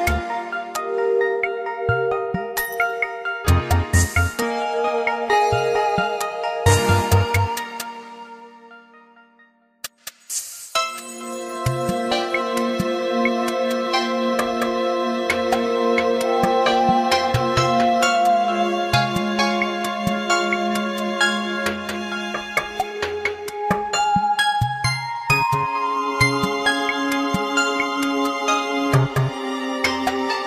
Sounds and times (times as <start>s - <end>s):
Music: 0.0s - 30.4s.